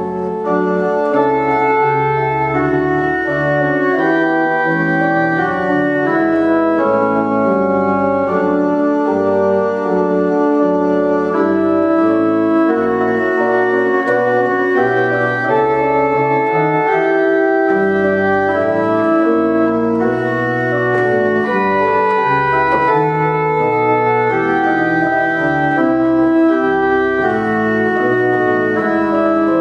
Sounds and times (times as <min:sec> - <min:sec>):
Organ: 0:00.0 - 0:29.6
Piano: 0:00.0 - 0:29.6.